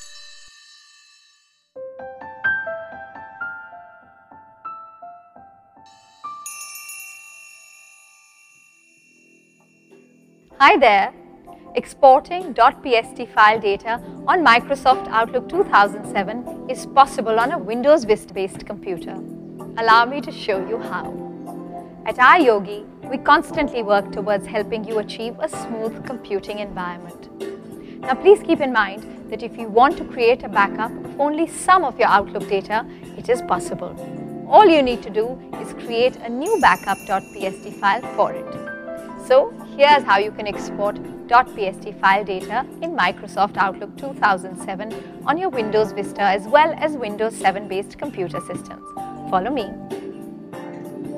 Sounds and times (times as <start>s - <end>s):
Music: 0.0s - 51.1s
Speech: 10.6s - 11.1s, 11.8s - 19.2s, 19.8s - 21.1s, 22.1s - 27.2s, 28.1s - 38.5s, 39.2s - 49.8s.